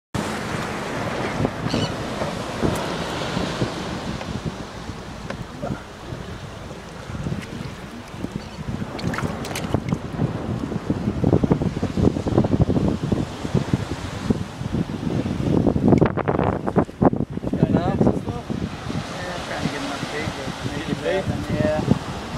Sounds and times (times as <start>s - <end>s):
Waves, surf: 0.2s - 22.3s
Wind noise (microphone): 0.2s - 22.3s.